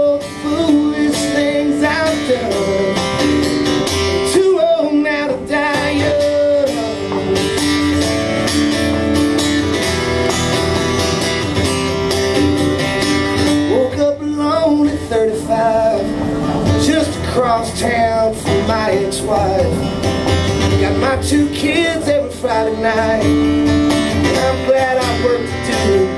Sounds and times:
Music: 0:00.0 - 0:26.1.

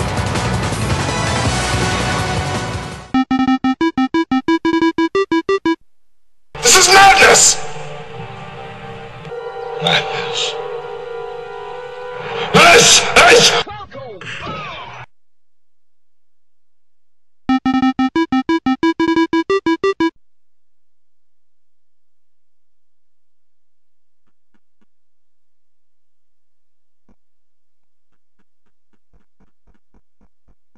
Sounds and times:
Music: 0:00.0 - 0:03.2, 0:07.5 - 0:13.6
Speech: 0:06.6 - 0:07.6, 0:12.6 - 0:14.8.

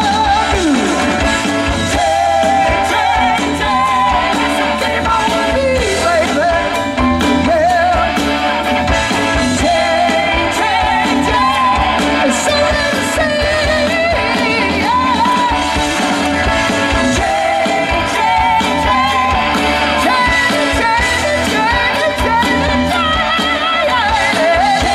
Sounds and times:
Music: 0:00.0 - 0:24.9.

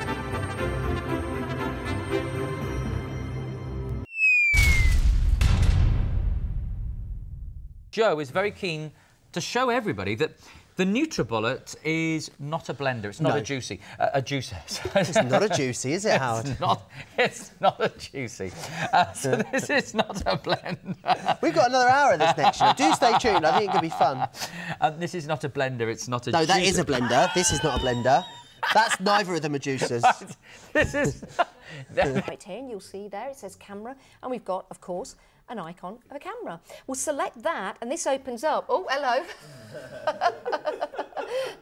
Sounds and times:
Music: 0:00.0 - 0:04.1.

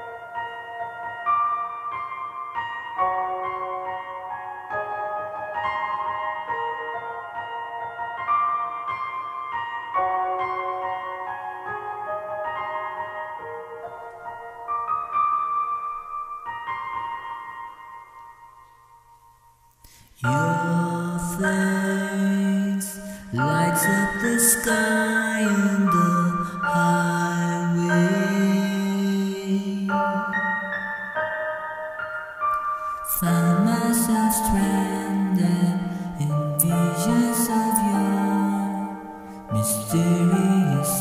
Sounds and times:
Music: 0:00.0 - 0:41.0
Female singing: 0:33.1 - 0:38.9.

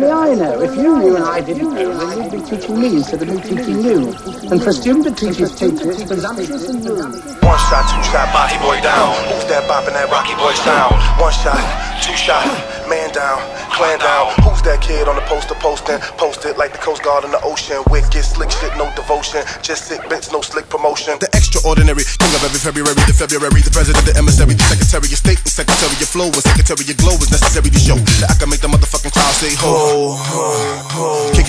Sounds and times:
Electronica: 0:00.0 - 0:19.5.

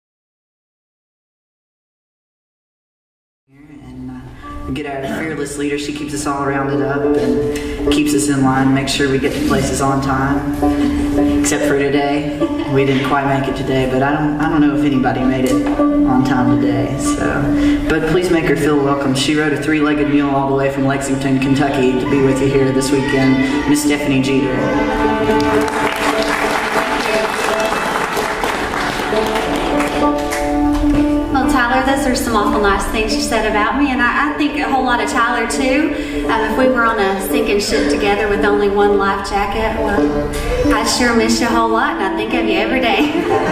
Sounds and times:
Speech: 0:03.5 - 0:10.5, 0:11.5 - 0:24.8
Music: 0:03.5 - 0:43.5.

